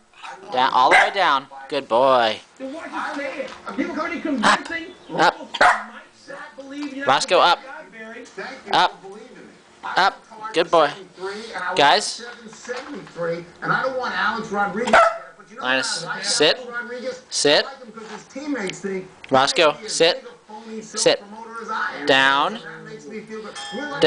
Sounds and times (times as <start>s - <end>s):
Canidae, dogs, wolves: 0.2s - 1.2s, 5.6s - 6.0s, 14.9s - 15.3s
Dog: 0.2s - 1.2s, 5.6s - 5.9s, 14.9s - 15.3s
Speech: 0.2s - 24.0s.